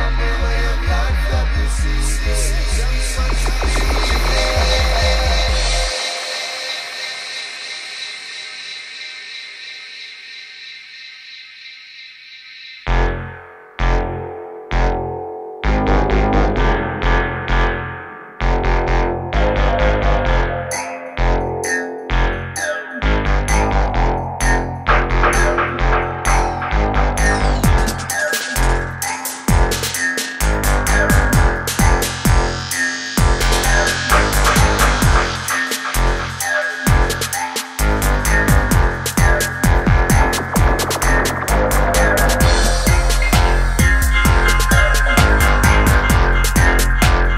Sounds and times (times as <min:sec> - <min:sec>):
Music: 0:00.0 - 0:09.1, 0:12.9 - 0:47.3.